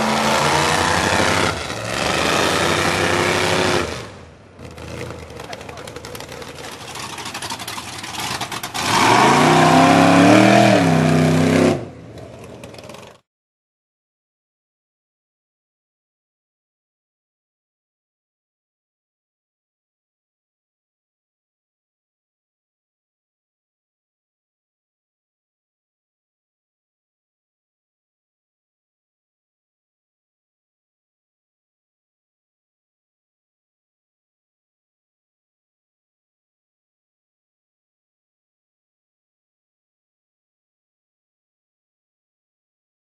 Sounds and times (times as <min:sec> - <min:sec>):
Vehicle: 0:00.0 - 0:13.3.